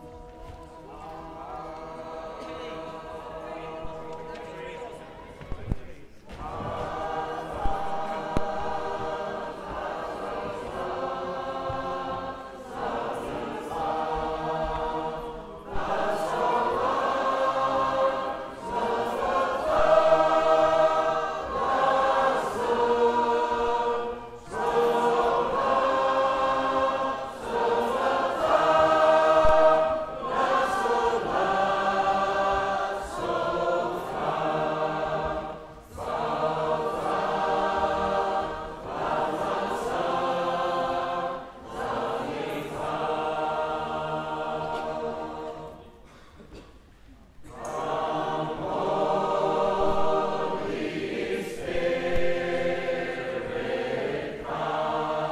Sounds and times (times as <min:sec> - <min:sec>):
Music: 0:00.0 - 0:05.0, 0:06.3 - 0:46.0.